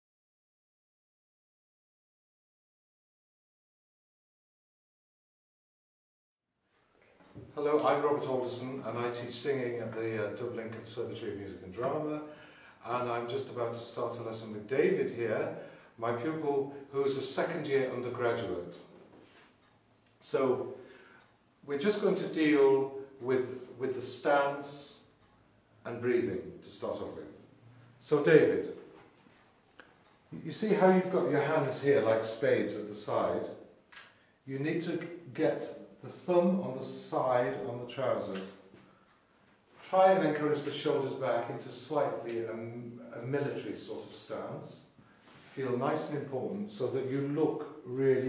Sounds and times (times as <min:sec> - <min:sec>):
Speech: 0:07.5 - 0:19.0, 0:20.2 - 0:20.8, 0:21.7 - 0:25.2, 0:25.8 - 0:28.9, 0:30.3 - 0:33.7, 0:34.4 - 0:38.7, 0:39.8 - 0:48.2.